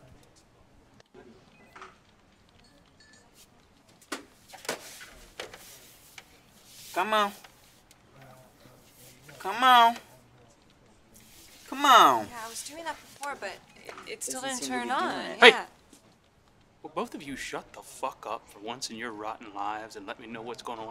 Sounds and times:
Speech: 8.2 - 10.6, 11.7 - 15.7, 16.9 - 20.9.

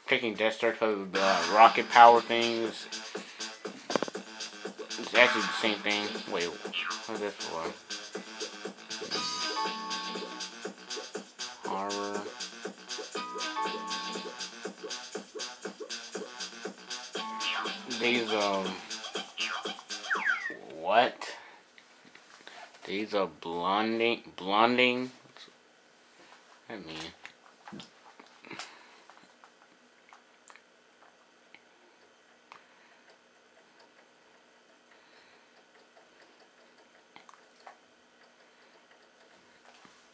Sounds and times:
Speech: 0.1 - 2.9, 5.0 - 7.8, 11.7 - 12.3, 17.9 - 18.8, 20.6 - 21.4, 22.8 - 25.2, 26.7 - 27.2.

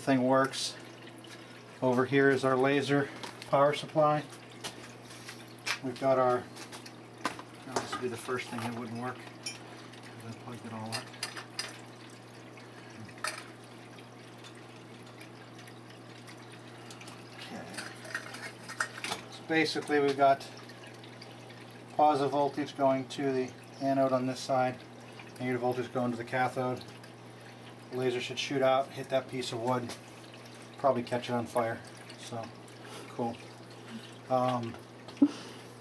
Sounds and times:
Speech: 0.0 - 0.8, 1.8 - 4.3, 5.8 - 6.5, 7.7 - 9.2, 10.2 - 11.1, 19.3 - 20.5, 22.0 - 24.8, 25.4 - 26.8, 27.9 - 30.0, 30.8 - 32.5, 33.1 - 33.4, 34.3 - 34.8
Fill (with liquid): 0.0 - 35.8.

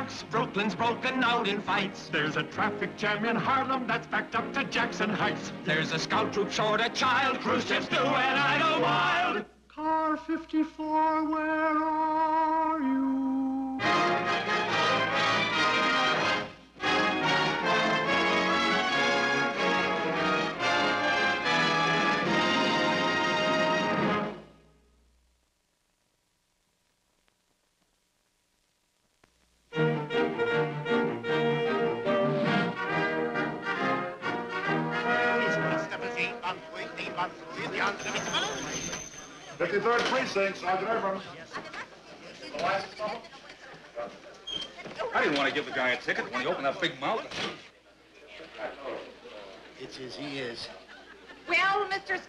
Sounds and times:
Music: 0.0 - 9.4, 12.0 - 25.0, 29.7 - 38.8.

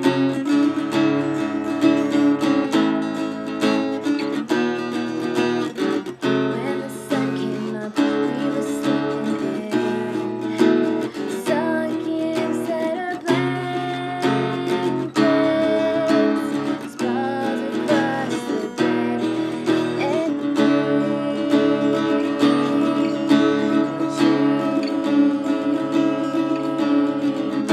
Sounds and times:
Music: 0.0 - 27.7.

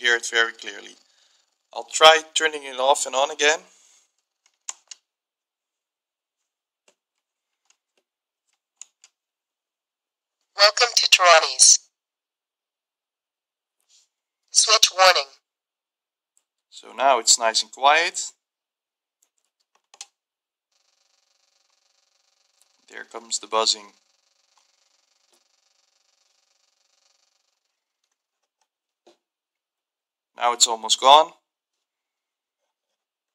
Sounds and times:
Speech: 0.0 - 1.0, 1.8 - 3.7, 10.6 - 11.8, 14.6 - 15.4, 16.8 - 18.4, 22.9 - 23.9, 30.4 - 31.4.

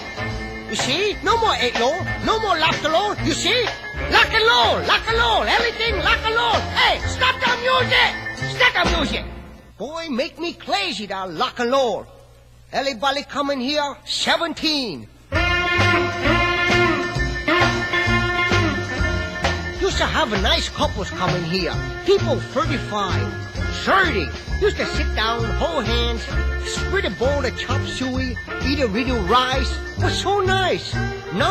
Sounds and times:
Rock and roll: 0.0 - 9.6, 15.3 - 31.5
Speech: 0.7 - 15.1, 19.8 - 31.5.

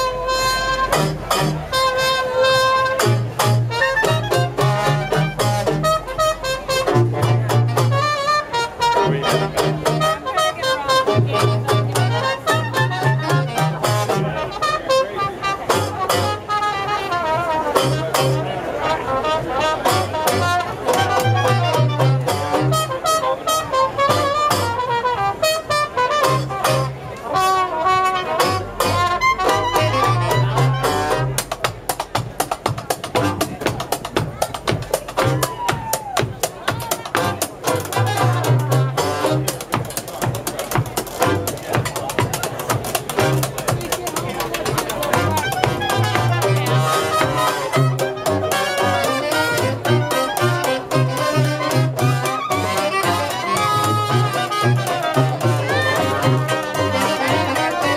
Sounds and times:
Music: 0.0 - 57.9
Speech: 0.0 - 57.9.

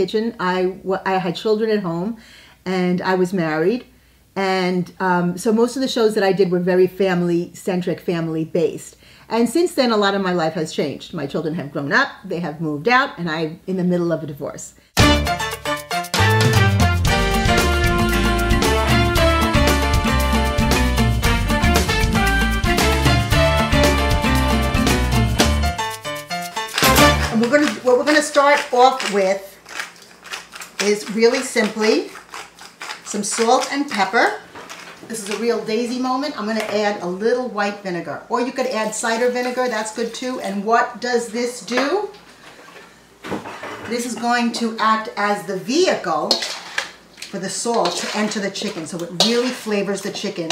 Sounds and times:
Speech: 0.0 - 14.7, 27.3 - 29.6, 30.8 - 32.1, 33.1 - 34.4, 35.1 - 42.2, 43.8 - 46.4, 47.3 - 50.5.

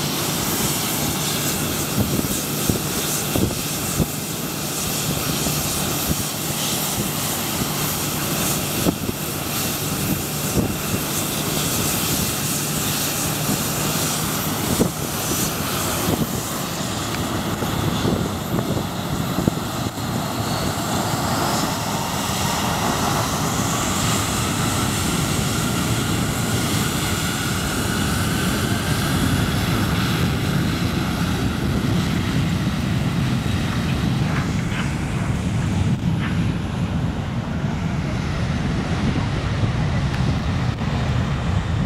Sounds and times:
Aircraft engine: 0.0 - 41.8
Outside, rural or natural: 0.0 - 41.8.

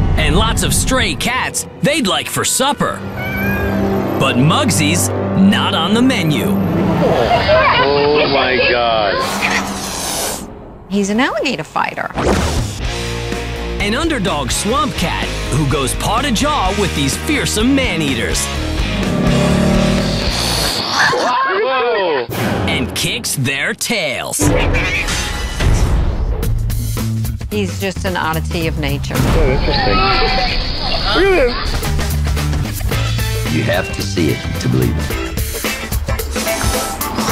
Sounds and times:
Music: 0.0 - 21.0, 22.3 - 23.4, 24.4 - 37.3
Speech: 13.8 - 18.4, 22.7 - 25.2, 27.6 - 29.2, 33.5 - 35.1.

